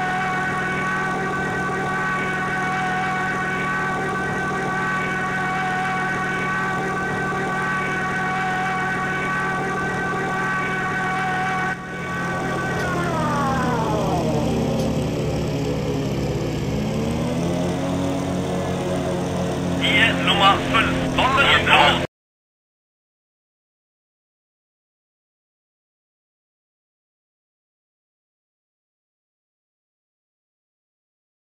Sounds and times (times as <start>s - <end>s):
Vehicle: 0.0s - 22.1s
Speech: 19.8s - 22.1s.